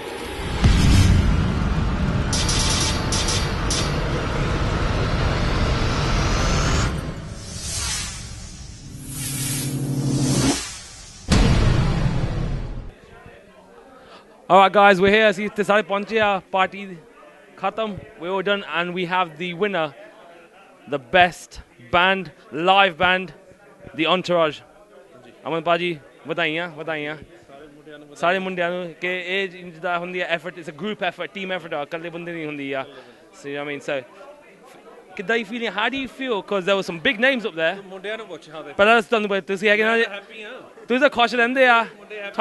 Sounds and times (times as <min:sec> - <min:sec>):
Speech: 0:13.0 - 0:42.4.